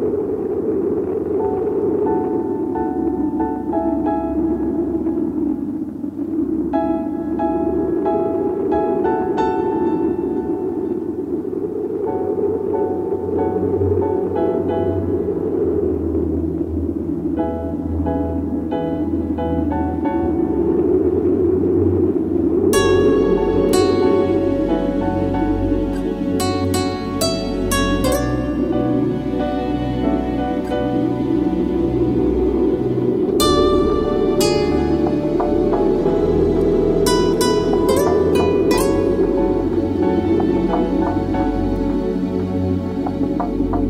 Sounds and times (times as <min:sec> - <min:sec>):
Music: 0:00.0 - 0:43.8.